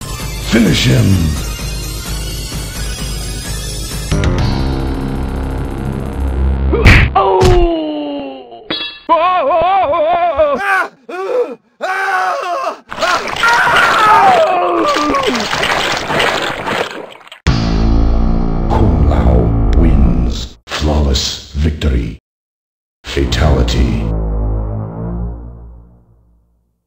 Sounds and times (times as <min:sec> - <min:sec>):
Music: 0:00.0 - 0:06.8, 0:17.5 - 0:19.8, 0:23.1 - 0:26.8
Speech: 0:00.5 - 0:01.4, 0:18.7 - 0:22.2, 0:23.1 - 0:24.1.